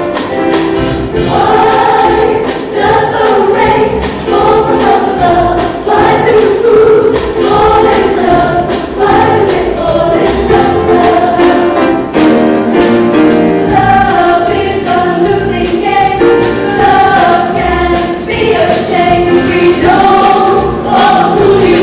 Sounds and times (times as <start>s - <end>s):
Music: 0.0s - 21.8s.